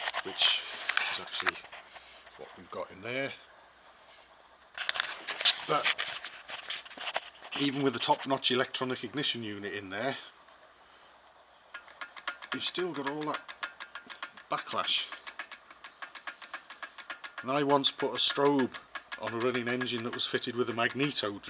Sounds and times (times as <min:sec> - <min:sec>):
Speech: 0:00.2 - 0:01.6, 0:02.4 - 0:03.5, 0:05.7 - 0:05.9, 0:07.6 - 0:10.3, 0:12.6 - 0:13.4, 0:14.5 - 0:15.2, 0:17.4 - 0:21.5.